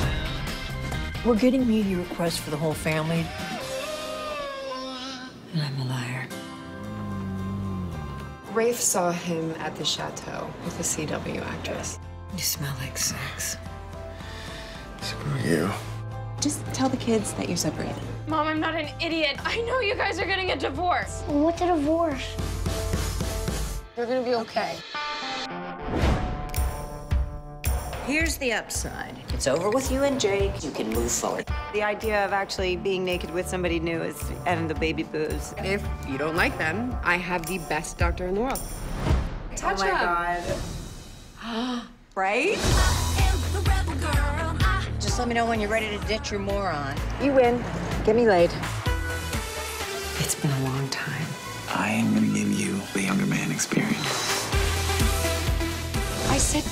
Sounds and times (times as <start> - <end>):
Music: 0.0 - 4.6, 5.4 - 41.6, 42.2 - 56.7.